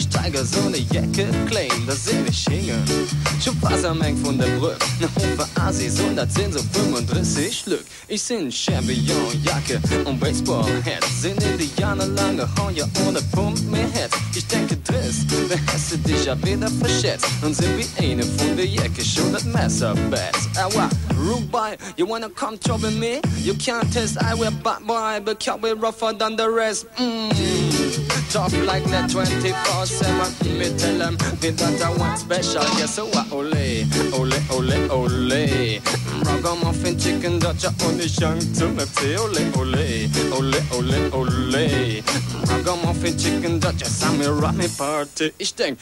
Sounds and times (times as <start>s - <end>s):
Music: 0.0s - 7.7s, 8.4s - 25.8s, 26.7s - 45.0s.